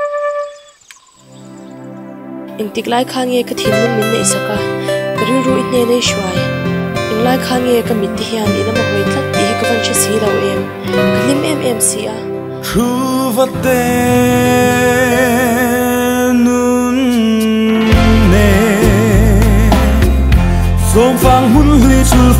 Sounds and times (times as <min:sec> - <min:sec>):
Music: 0:00.0 - 0:22.3
Speech: 0:02.6 - 0:06.5, 0:07.1 - 0:12.2.